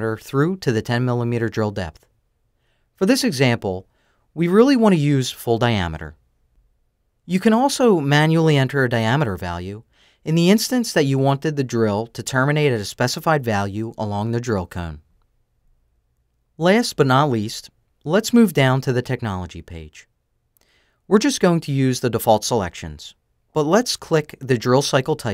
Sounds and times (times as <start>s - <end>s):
Speech: 0.0s - 2.1s, 3.0s - 6.2s, 7.3s - 15.0s, 16.6s - 20.1s, 21.1s - 25.3s.